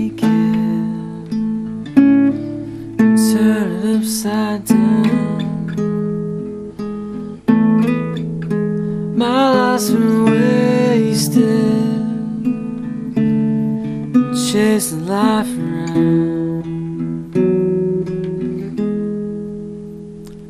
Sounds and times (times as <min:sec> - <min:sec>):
Guitar: 0:00.0 - 0:20.4.